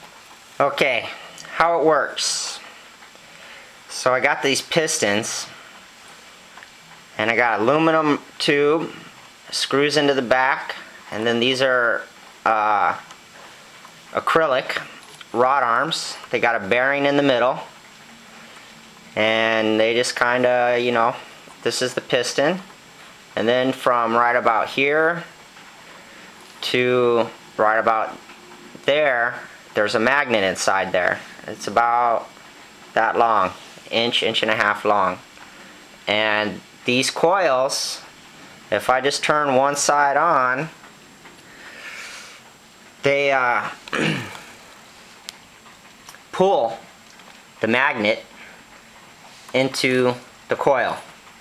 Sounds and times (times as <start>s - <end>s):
Speech: 0.6s - 2.7s, 3.9s - 5.6s, 7.2s - 13.1s, 14.1s - 17.8s, 19.2s - 22.7s, 23.4s - 25.4s, 26.6s - 28.2s, 28.8s - 35.3s, 36.1s - 38.1s, 38.7s - 40.8s, 43.0s - 44.3s, 46.3s - 46.8s, 47.6s - 48.3s, 49.5s - 51.1s.